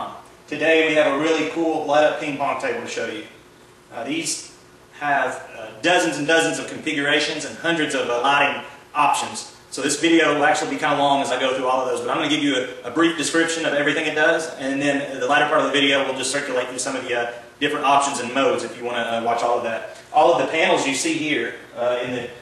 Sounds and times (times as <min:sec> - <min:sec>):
Speech: 0:00.0 - 0:22.4.